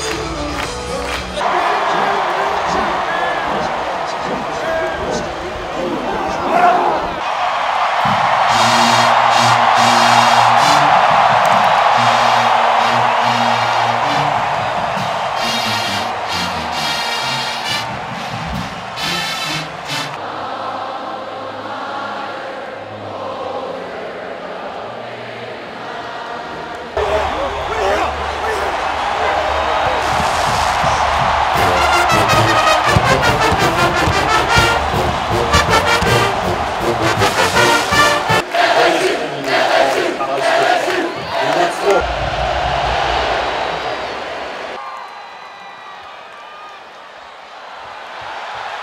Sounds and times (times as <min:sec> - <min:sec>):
Music: 0:00.0 - 0:01.4, 0:08.5 - 0:38.6
Speech: 0:01.4 - 0:07.2, 0:38.6 - 0:42.0.